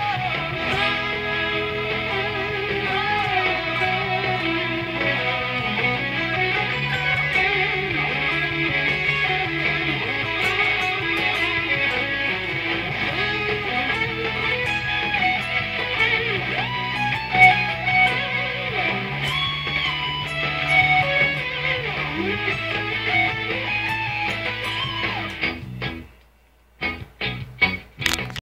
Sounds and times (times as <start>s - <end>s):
Electric guitar: 0.0s - 28.4s.